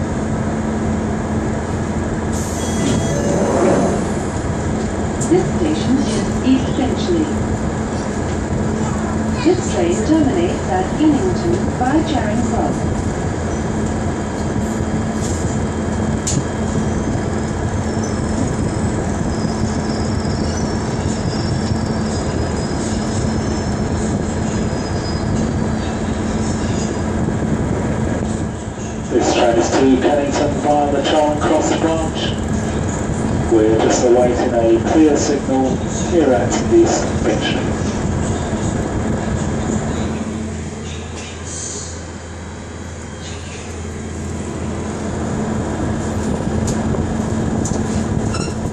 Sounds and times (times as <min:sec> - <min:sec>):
Railroad car, train wagon: 0:00.0 - 0:48.7
Train: 0:00.0 - 0:48.7
Speech: 0:08.8 - 0:12.8, 0:29.1 - 0:32.4, 0:33.5 - 0:37.8.